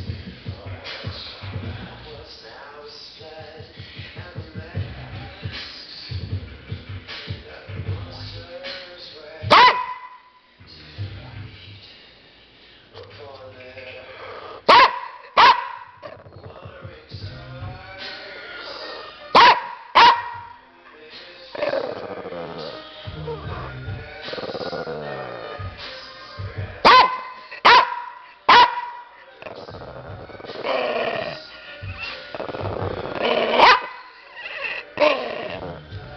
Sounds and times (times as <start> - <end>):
Music: 0.0 - 36.1
Speech: 0.5 - 6.2, 7.3 - 9.5, 10.6 - 14.6, 16.2 - 19.2, 20.8 - 23.7
Bow-wow: 9.5 - 10.2, 14.7 - 16.2, 19.4 - 20.5, 26.8 - 30.0, 32.4 - 35.8
Bark: 9.5 - 10.3, 14.7 - 16.2, 19.4 - 20.5, 26.8 - 29.1, 33.3 - 35.6.